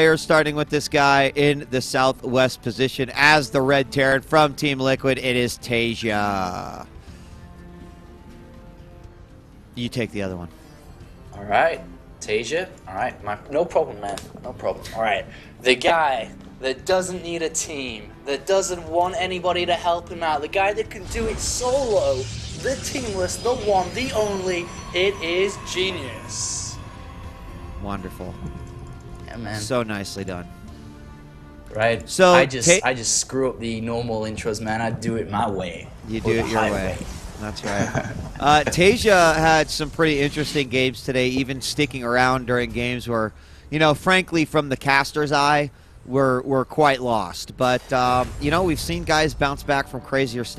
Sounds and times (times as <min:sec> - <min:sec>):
Music: 0:00.0 - 0:50.5.